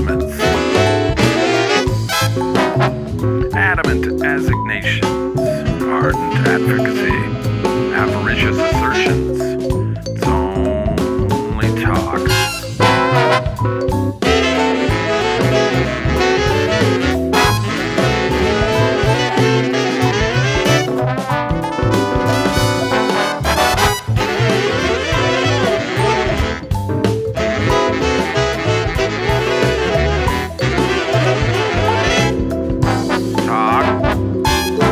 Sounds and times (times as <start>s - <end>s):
Musical instrument: 0.0s - 34.9s.